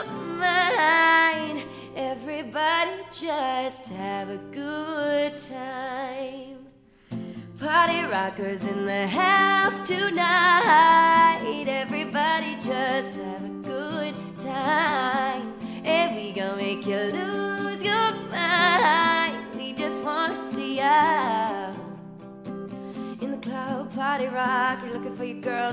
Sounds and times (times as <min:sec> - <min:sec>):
Music: 0:00.0 - 0:25.7.